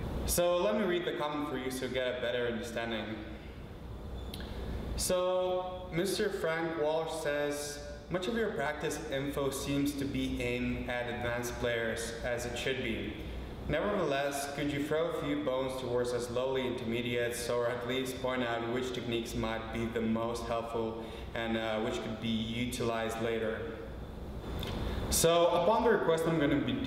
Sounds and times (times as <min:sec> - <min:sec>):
Speech: 0:00.3 - 0:03.4, 0:05.0 - 0:23.8, 0:25.1 - 0:26.8.